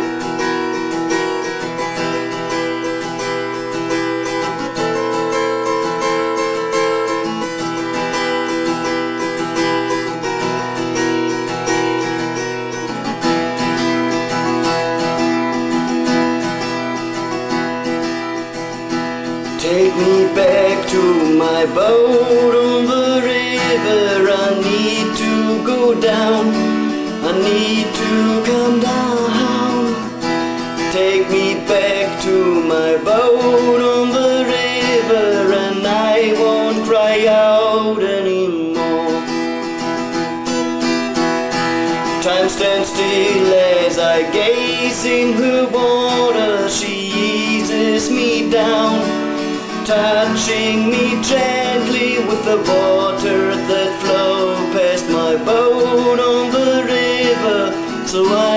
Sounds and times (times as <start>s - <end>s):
Acoustic guitar: 0.0s - 58.5s
Strum: 0.0s - 58.5s.